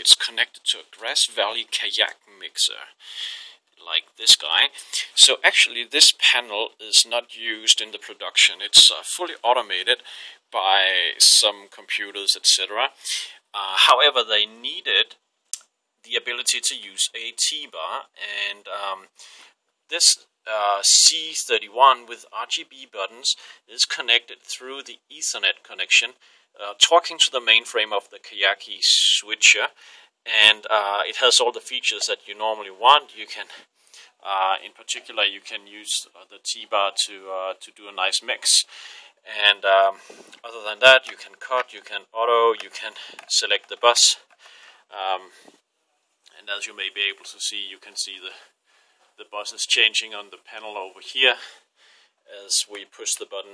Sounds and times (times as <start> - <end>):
Speech: 0.0 - 15.2, 16.1 - 45.5, 46.3 - 48.5, 49.2 - 51.6, 52.3 - 53.5.